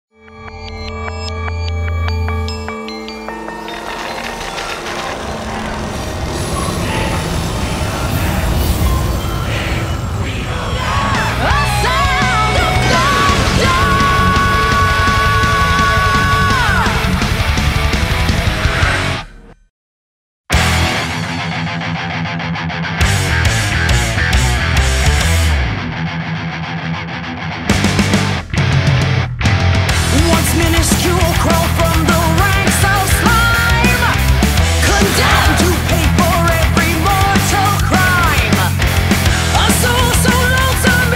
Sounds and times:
Music: 0.1s - 19.7s, 20.5s - 41.1s.

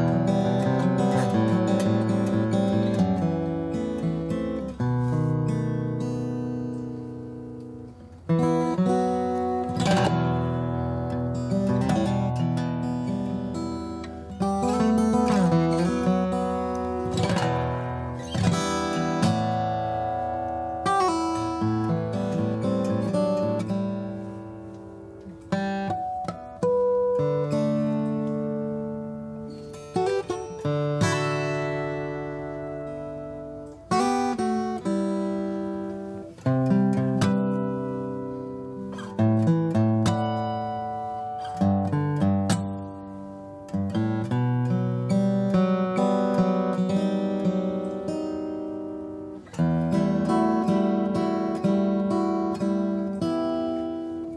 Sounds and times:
Acoustic guitar: 0.0s - 54.3s
Strum: 0.0s - 54.3s.

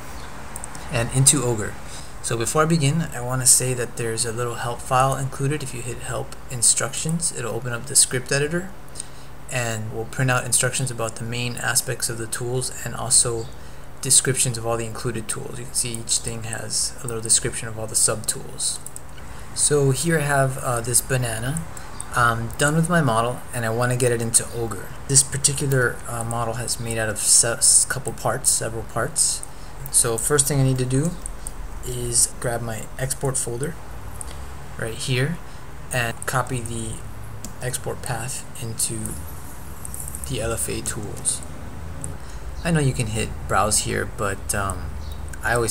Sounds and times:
Speech: 0.8s - 18.9s, 19.6s - 33.8s, 34.8s - 39.2s, 40.2s - 41.4s, 42.6s - 45.7s.

